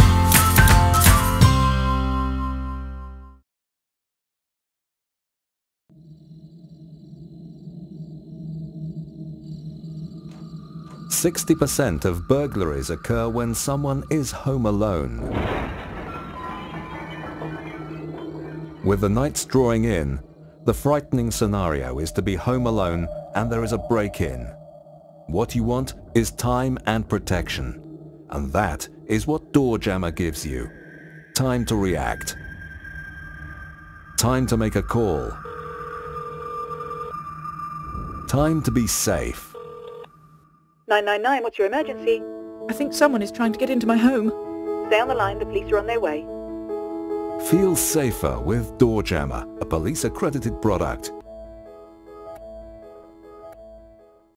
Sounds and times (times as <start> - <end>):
Speech: 11.1 - 15.4, 18.8 - 24.6, 25.3 - 30.7, 31.4 - 32.4, 34.2 - 35.4, 38.3 - 39.5, 40.9 - 44.3, 44.9 - 46.2, 47.4 - 51.2.